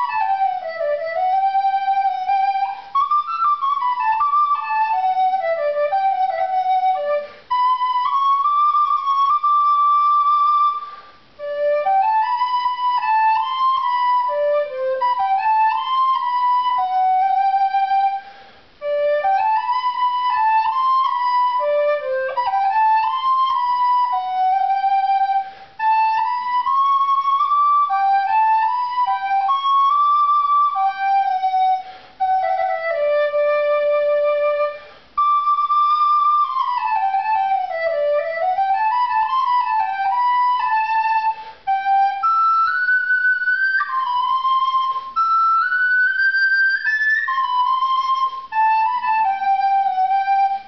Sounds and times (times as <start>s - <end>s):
Inside, small room: 0.0s - 50.6s
Music: 0.0s - 50.6s.